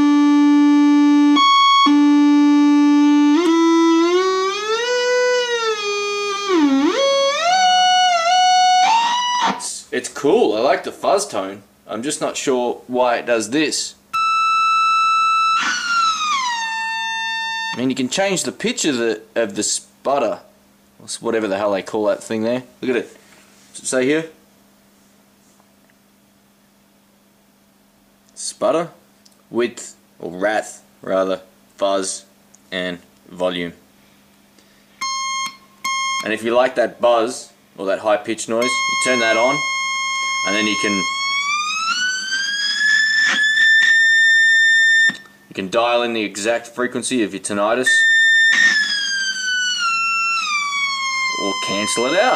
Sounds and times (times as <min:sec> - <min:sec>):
Effects unit: 0:00.0 - 0:09.8, 0:14.1 - 0:17.9, 0:35.0 - 0:36.4, 0:38.6 - 0:45.5, 0:47.8 - 0:52.3
Inside, small room: 0:00.0 - 0:52.3
Speech: 0:09.6 - 0:14.0, 0:17.8 - 0:23.2, 0:23.8 - 0:24.4, 0:28.4 - 0:33.8, 0:36.2 - 0:39.6, 0:40.5 - 0:41.1, 0:45.5 - 0:48.0, 0:51.4 - 0:52.3.